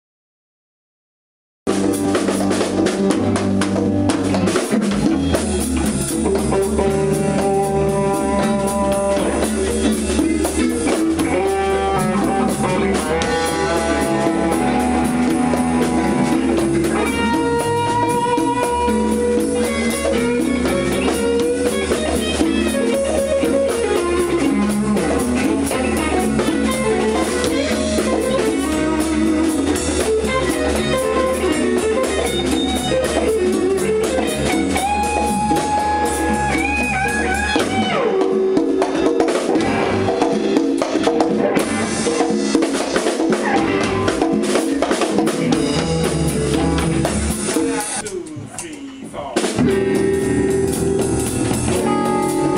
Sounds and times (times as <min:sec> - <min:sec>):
Electric guitar: 0:01.7 - 0:52.5.